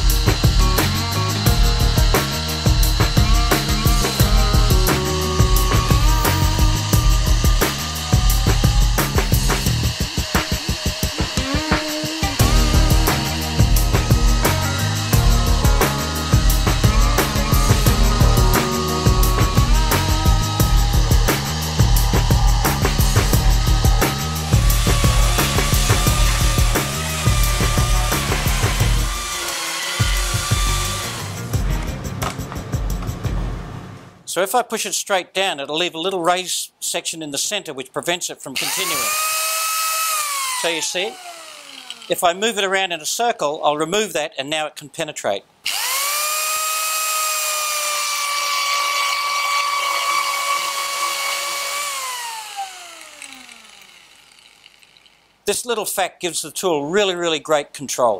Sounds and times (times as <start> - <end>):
Tools: 52.9 - 55.3.